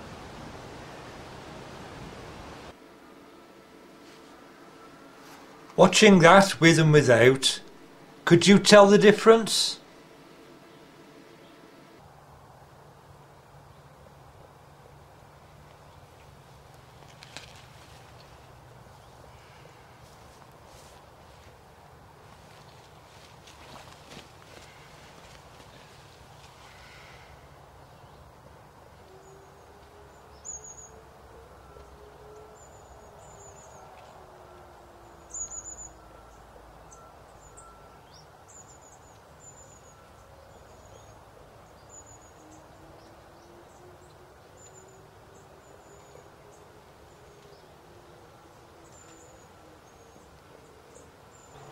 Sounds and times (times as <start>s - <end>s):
Outside, rural or natural: 0.0s - 51.7s.